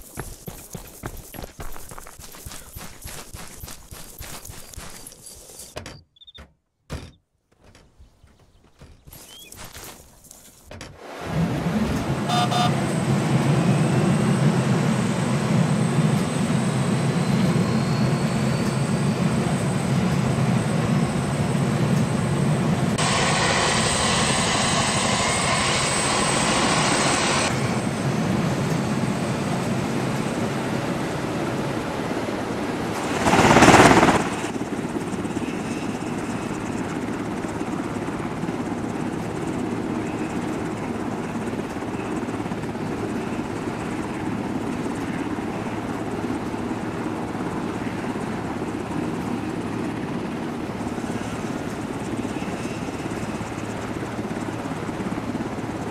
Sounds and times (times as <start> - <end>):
Outside, rural or natural: 0.0 - 55.9.